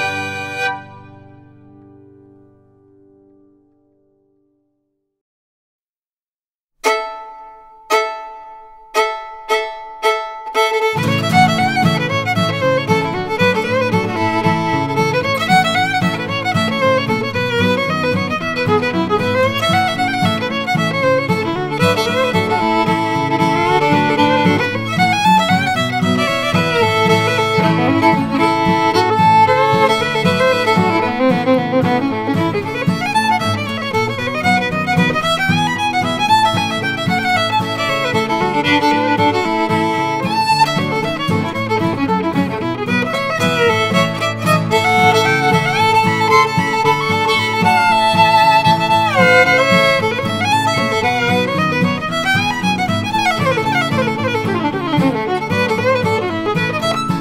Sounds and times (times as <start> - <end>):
Violin, fiddle: 0.0 - 1.8, 6.8 - 57.2.